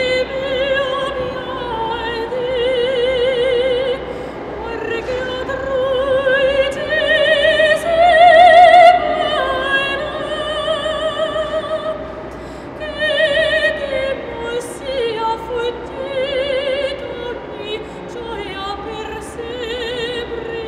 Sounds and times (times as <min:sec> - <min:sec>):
Opera: 0:00.0 - 0:20.6.